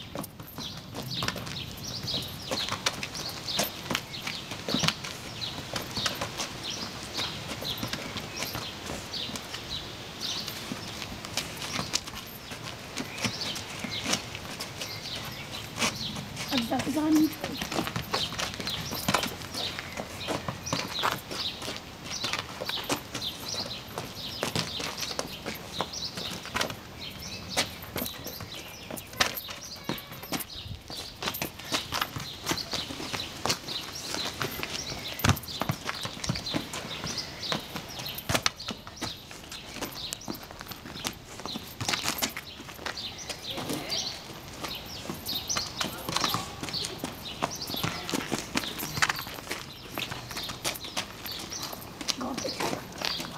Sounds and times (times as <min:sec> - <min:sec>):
Speech: 0:16.5 - 0:17.7, 0:43.4 - 0:44.2, 0:45.8 - 0:47.0, 0:52.1 - 0:53.3.